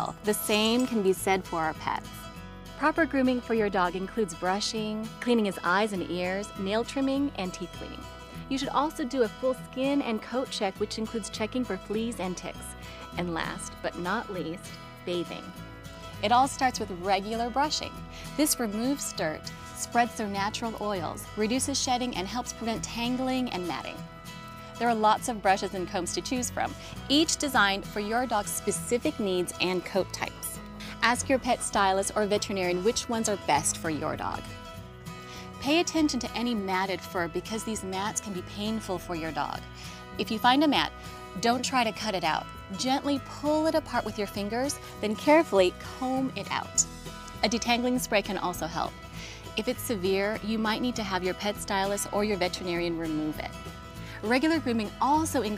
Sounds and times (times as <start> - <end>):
Speech: 0.0 - 2.2, 2.8 - 15.5, 16.2 - 24.0, 24.8 - 34.5, 35.6 - 39.6, 40.2 - 46.8, 47.4 - 48.9, 49.6 - 53.5, 54.2 - 55.5
Music: 0.0 - 55.5.